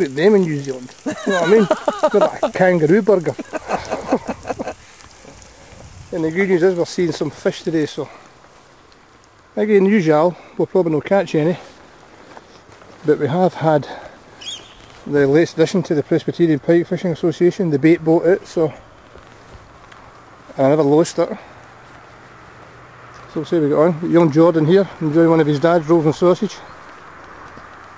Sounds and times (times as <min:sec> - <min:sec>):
Speech: 0:00.0 - 0:04.2, 0:06.1 - 0:08.1, 0:09.6 - 0:11.6, 0:13.0 - 0:14.0, 0:15.0 - 0:18.8, 0:20.6 - 0:21.5, 0:23.3 - 0:26.7.